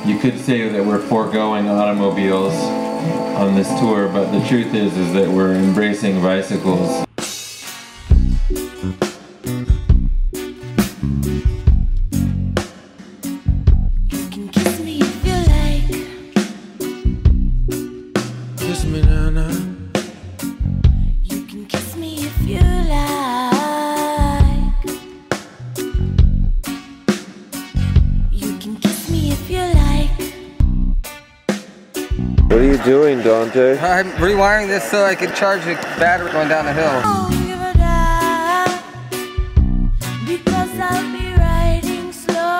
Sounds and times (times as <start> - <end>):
Speech: 0.0 - 2.7, 3.4 - 7.1, 18.6 - 19.6, 32.5 - 37.8
Music: 0.0 - 42.5.